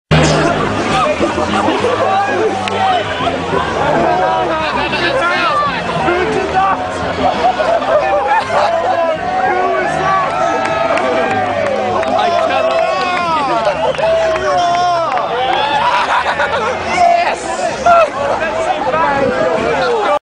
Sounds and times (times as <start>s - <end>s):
Speech: 16.6s - 20.2s.